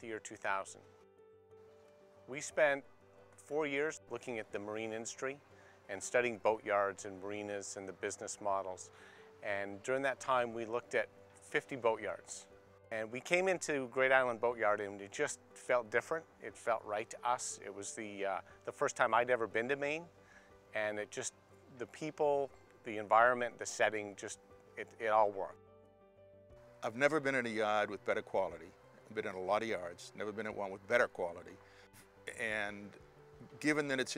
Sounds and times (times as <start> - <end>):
Speech: 0.0 - 0.8, 2.3 - 2.8, 3.5 - 20.1, 20.8 - 25.5, 26.8 - 31.6, 32.3 - 34.1.